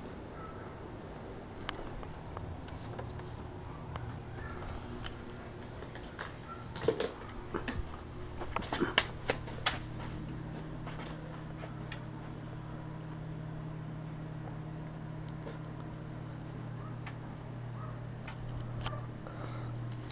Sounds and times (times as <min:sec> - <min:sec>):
Mechanical fan: 0:00.0 - 0:20.1.